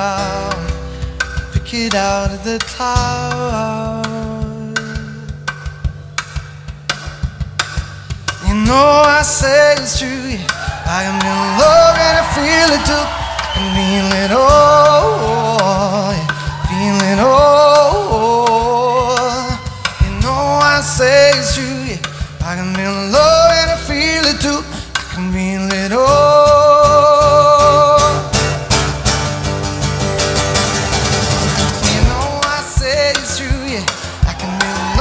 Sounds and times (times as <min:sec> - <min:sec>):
Guitar: 0:00.0 - 0:35.0
Singing: 0:08.4 - 0:28.3, 0:31.8 - 0:35.0.